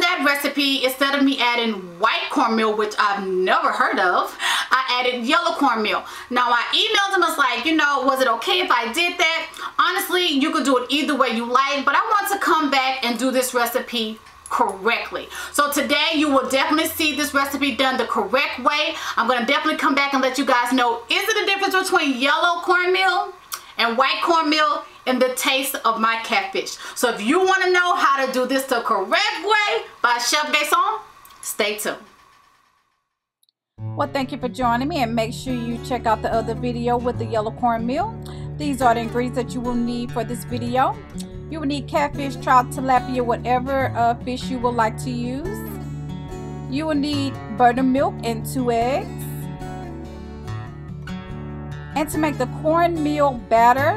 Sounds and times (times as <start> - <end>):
Speech: 0.0 - 32.1, 34.0 - 45.8, 46.7 - 49.4, 52.0 - 53.9
Music: 15.6 - 22.2, 33.8 - 53.9.